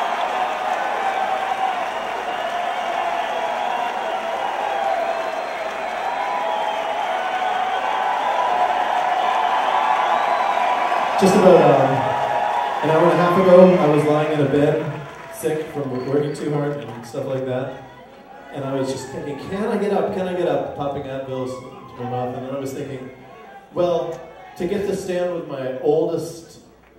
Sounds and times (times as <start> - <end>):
Male speech, man speaking: 11.2 - 12.2, 12.8 - 17.8, 18.5 - 26.6.